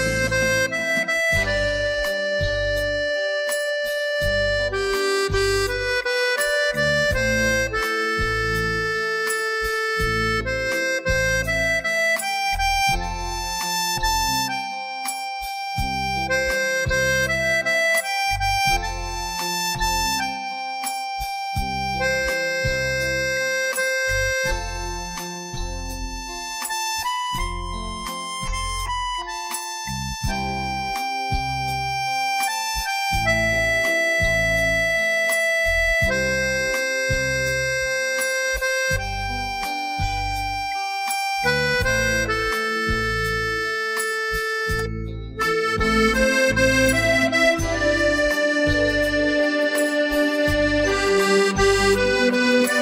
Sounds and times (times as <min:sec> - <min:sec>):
Music: 0:00.0 - 0:52.8.